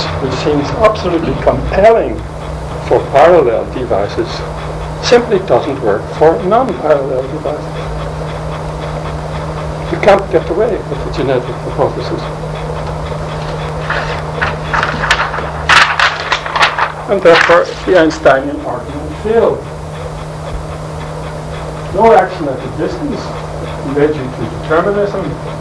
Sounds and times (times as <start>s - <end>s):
Speech: 0.0s - 2.2s, 2.8s - 7.8s, 9.9s - 12.4s, 17.1s - 19.7s, 21.9s - 25.4s.